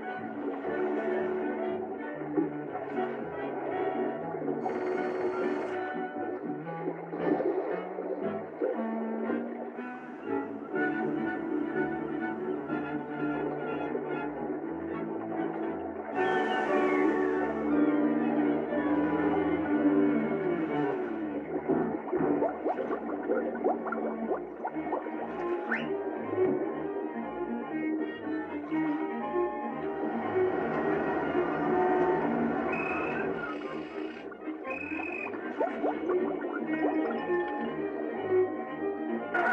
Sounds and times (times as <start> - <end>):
Music: 0.0 - 39.5.